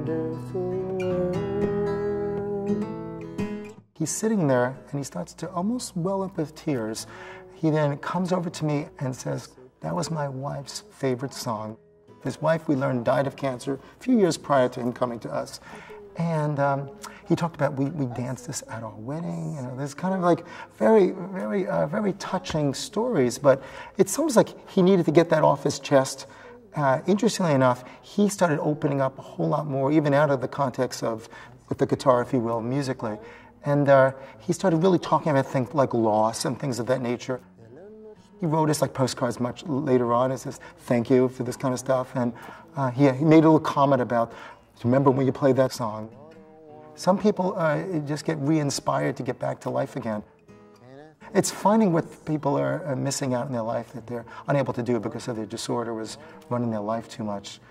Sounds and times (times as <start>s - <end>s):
Music: 0.0s - 57.7s
Speech: 4.0s - 57.7s.